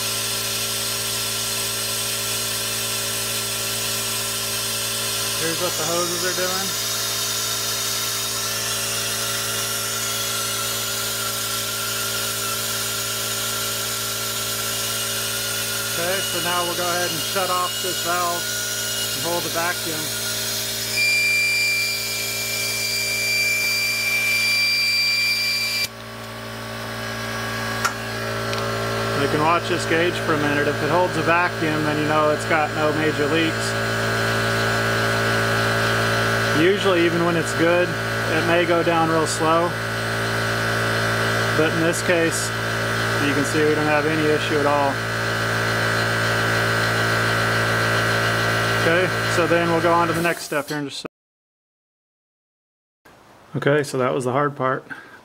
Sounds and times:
Engine: 0.0 - 50.8
Speech: 5.4 - 6.8, 15.9 - 18.4, 19.2 - 20.1, 29.2 - 33.8, 36.5 - 39.8, 41.6 - 42.5, 43.2 - 45.0, 48.8 - 51.1, 53.5 - 54.9.

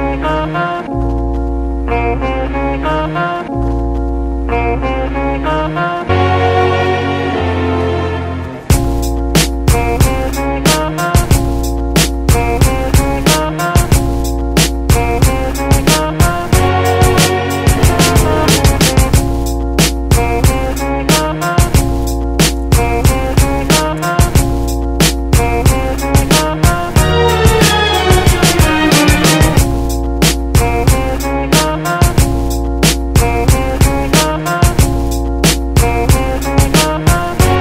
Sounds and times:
Music: 0.0 - 37.6.

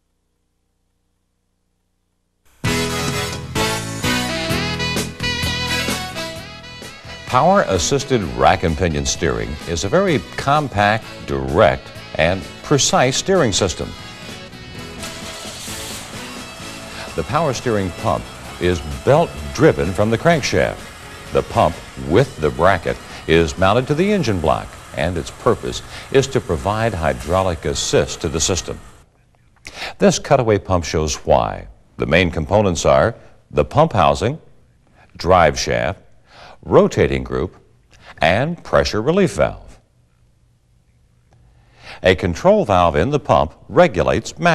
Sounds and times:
Music: 2.5 - 29.0
Speech: 7.3 - 14.0, 17.1 - 28.8, 30.0 - 34.5, 35.2 - 36.0, 36.6 - 39.8, 42.0 - 44.5.

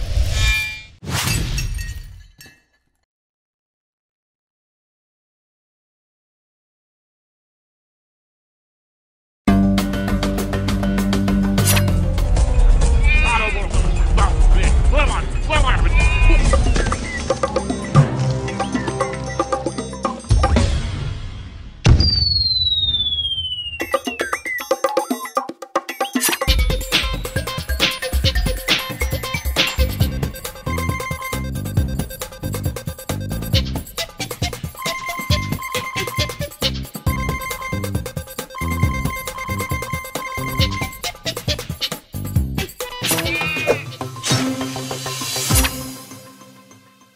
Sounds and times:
Music: 9.5 - 21.8, 23.8 - 47.1.

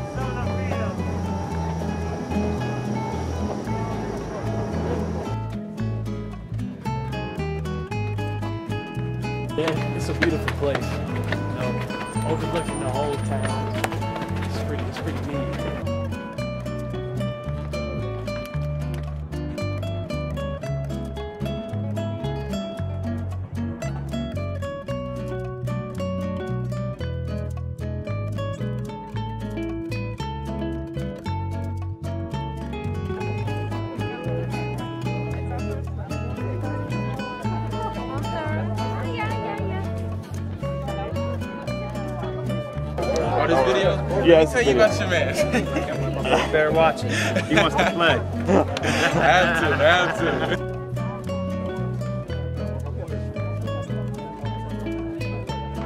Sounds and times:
Music: 0.0 - 55.8
Speech: 9.6 - 13.8, 34.1 - 48.3.

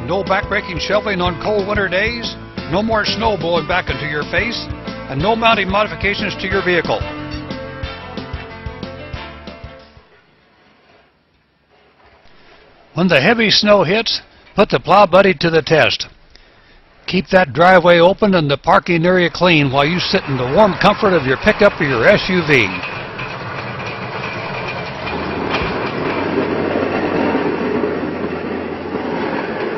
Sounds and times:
Speech: 0.0 - 7.1, 13.0 - 16.1, 17.1 - 22.8
Vehicle: 20.2 - 29.7.

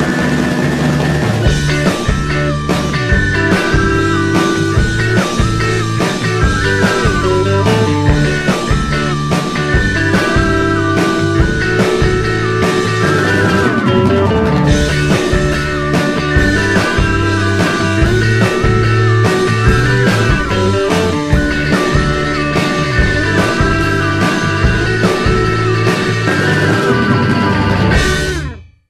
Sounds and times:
Soundtrack music: 1.4 - 28.6.

